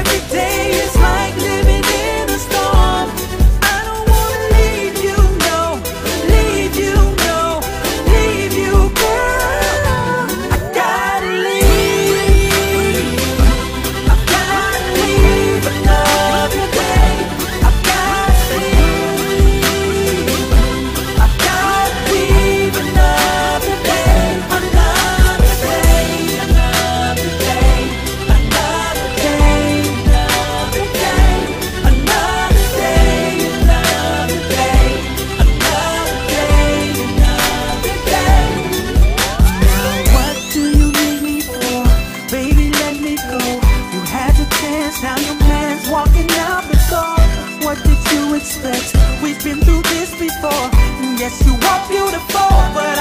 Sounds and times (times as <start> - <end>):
Music: 0.0 - 53.0.